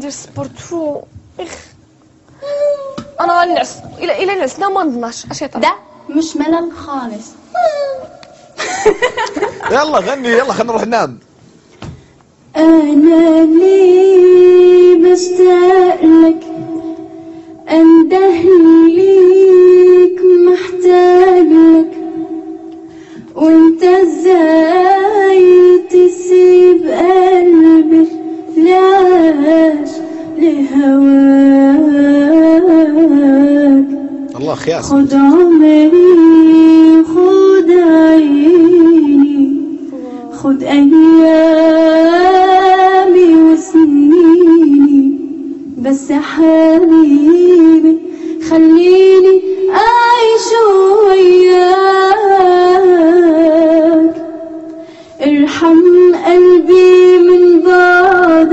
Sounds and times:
Female singing: 12.6 - 17.0, 17.7 - 22.4, 23.4 - 34.1, 34.9 - 45.2, 45.8 - 54.3, 55.2 - 58.5.

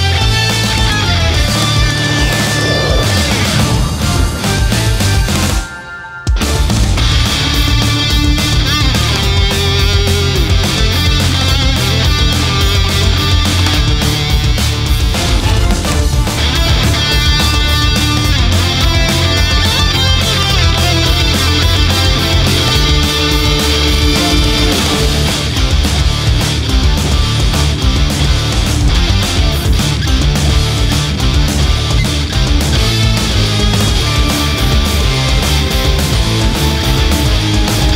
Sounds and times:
Bass guitar: 0.0 - 37.9
Electric guitar: 0.0 - 37.9.

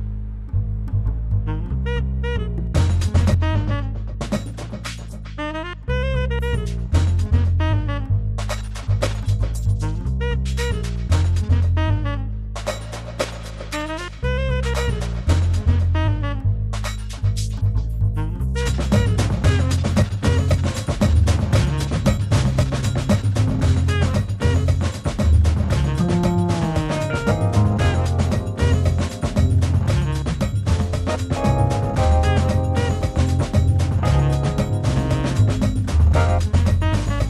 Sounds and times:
Synthesizer: 19.0 - 37.2
Piano: 25.8 - 37.2.

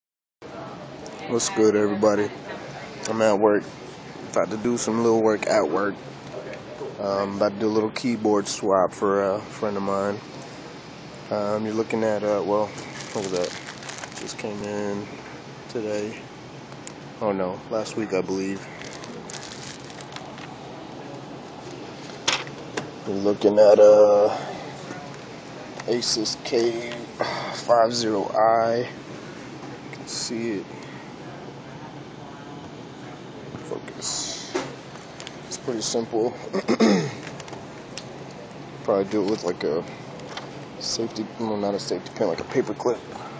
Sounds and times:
Speech: 0.5 - 3.7, 4.4 - 10.3, 11.3 - 13.6, 14.2 - 15.1, 17.2 - 19.2, 23.0 - 29.0, 29.9 - 34.7, 35.5 - 36.4, 38.9 - 39.9, 40.8 - 43.3.

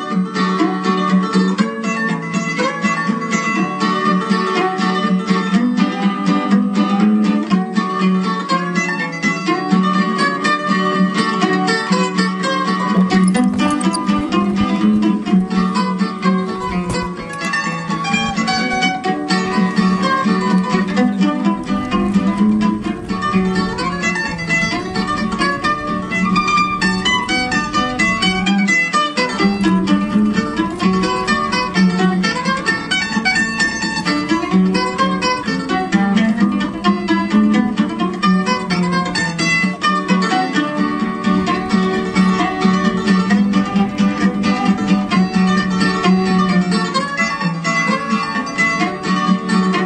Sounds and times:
Music: 0.0 - 49.8.

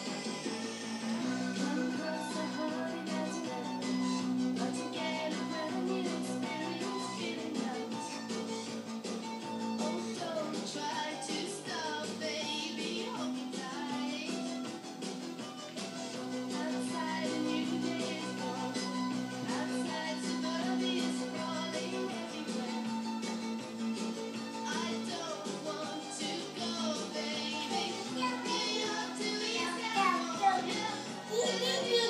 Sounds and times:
Music: 0.0 - 32.1
Speech: 29.6 - 32.1.

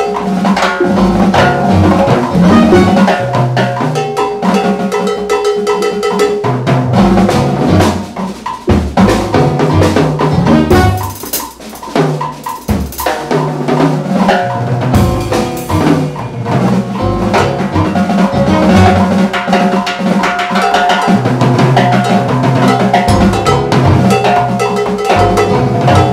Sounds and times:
Jazz: 0.0 - 26.1.

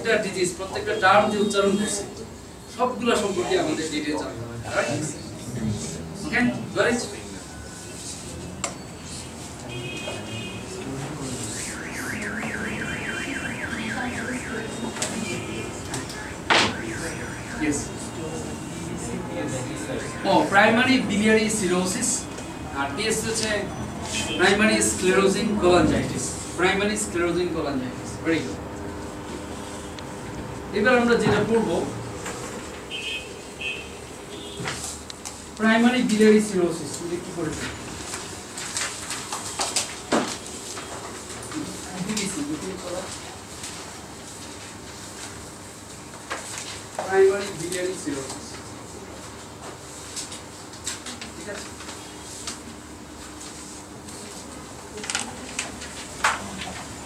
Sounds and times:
Speech: 30.7 - 32.0, 35.6 - 37.8, 41.6 - 43.4, 47.0 - 48.6.

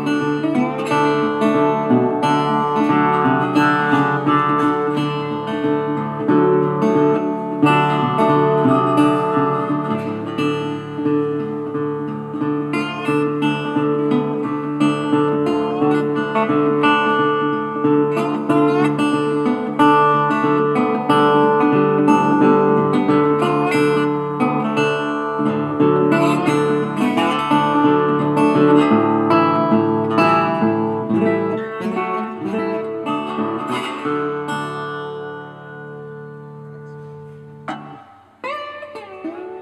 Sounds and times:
Acoustic guitar: 0.0 - 39.6
Electric guitar: 0.0 - 39.6.

